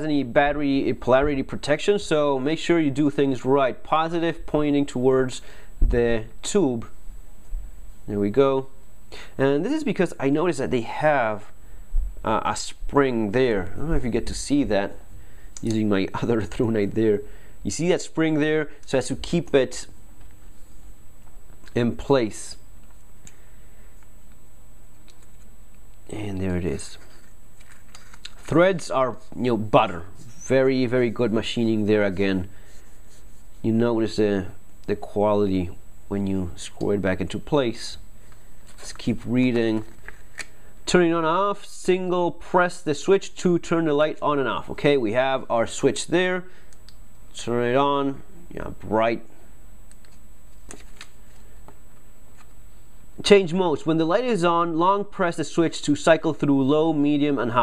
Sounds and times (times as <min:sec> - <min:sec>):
Speech: 0:00.0 - 0:07.0, 0:08.1 - 0:08.8, 0:09.4 - 0:11.6, 0:12.2 - 0:15.0, 0:15.6 - 0:20.0, 0:21.7 - 0:22.6, 0:26.1 - 0:27.1, 0:28.5 - 0:32.5, 0:33.6 - 0:38.0, 0:38.8 - 0:39.9, 0:40.9 - 0:46.5, 0:47.3 - 0:49.4, 0:53.2 - 0:57.6.